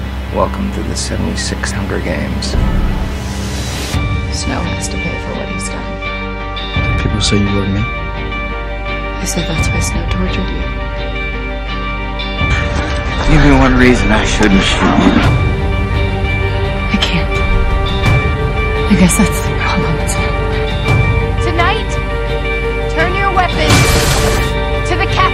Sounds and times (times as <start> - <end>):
Music: 0.0 - 25.3.